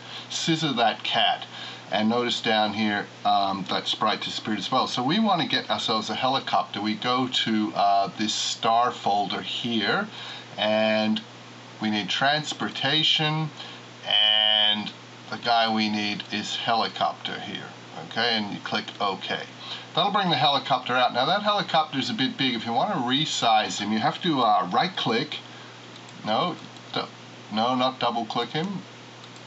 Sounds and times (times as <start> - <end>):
Speech: 0.3 - 25.5, 26.2 - 28.9.